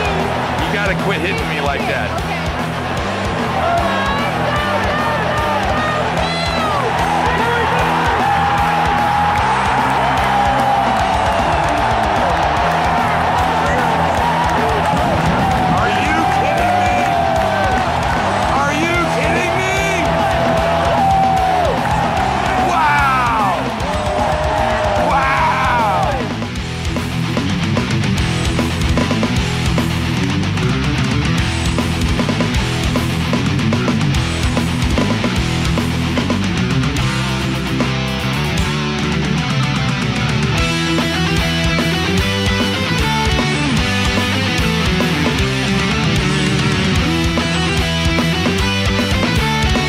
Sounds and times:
Music: 0.0s - 49.8s.

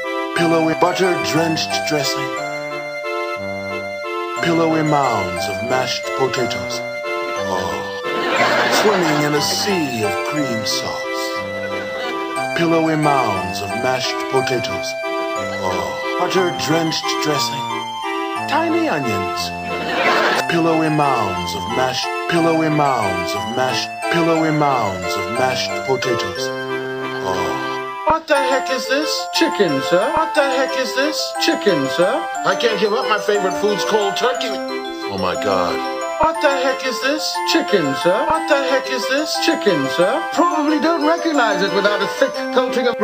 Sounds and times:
Speech: 0.4s - 2.4s, 4.4s - 6.8s, 7.4s - 11.4s, 12.5s - 15.0s, 15.6s - 17.6s, 18.4s - 19.6s, 20.4s - 26.6s, 27.2s - 43.0s.

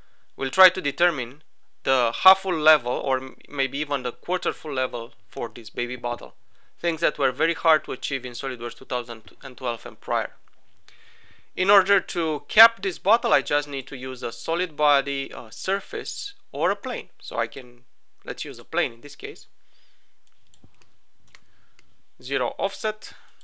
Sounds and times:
Speech: 0.4s - 10.4s, 11.6s - 19.5s, 22.2s - 23.3s.

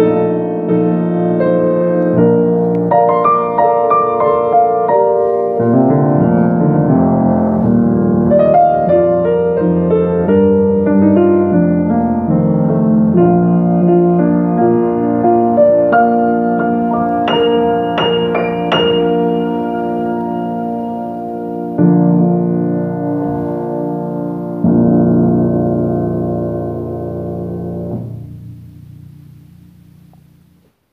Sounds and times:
Piano: 0.0s - 30.9s.

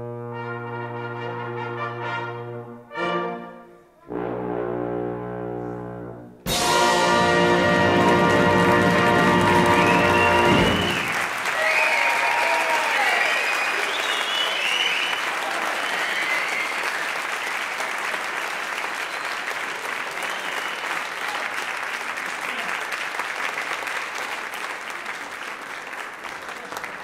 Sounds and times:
Applause: 7.4s - 27.0s.

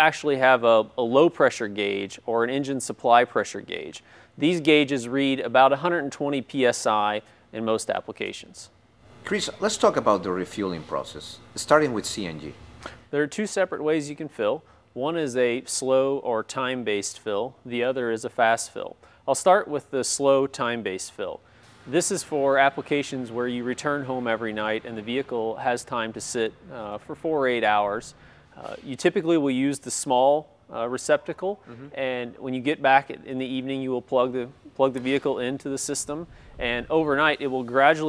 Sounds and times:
Speech: 9.3s - 12.6s, 13.2s - 38.0s.

